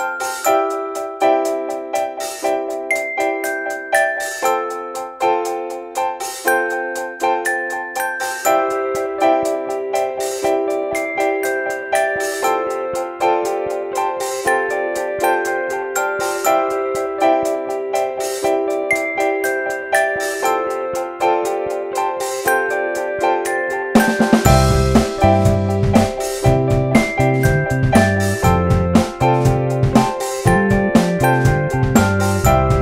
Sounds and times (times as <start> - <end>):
Music: 0.0 - 32.8.